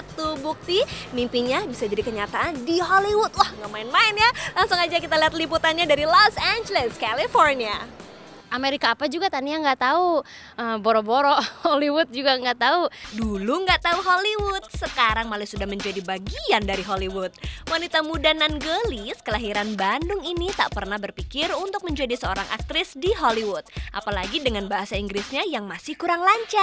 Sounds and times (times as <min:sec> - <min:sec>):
Music: 0:00.0 - 0:09.7, 0:13.0 - 0:26.6
Speech: 0:08.6 - 0:26.6.